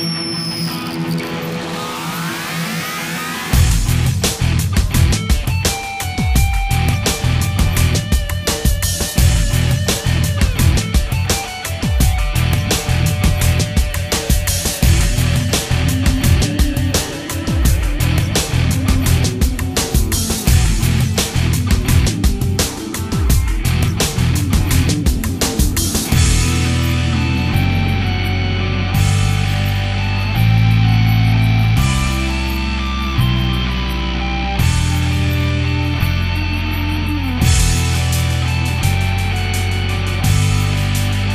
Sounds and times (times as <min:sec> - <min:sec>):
Funk: 0:03.3 - 0:41.3.